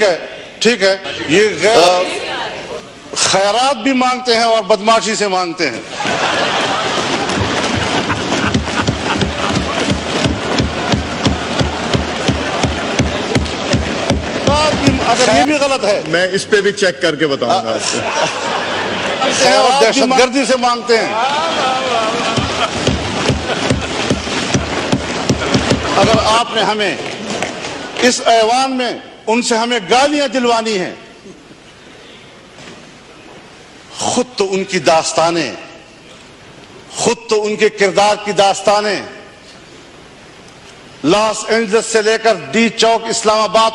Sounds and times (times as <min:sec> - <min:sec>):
Male speech, man speaking: 0:00.0 - 0:02.2, 0:03.2 - 0:05.8, 0:14.5 - 0:18.0, 0:19.2 - 0:22.2, 0:26.0 - 0:27.0, 0:28.0 - 0:31.1, 0:34.0 - 0:35.8, 0:36.9 - 0:39.3, 0:41.0 - 0:43.7
Narration, monologue: 0:00.0 - 0:02.2, 0:02.8 - 0:05.9, 0:13.5 - 0:18.6, 0:19.3 - 0:21.2, 0:23.7 - 0:43.7.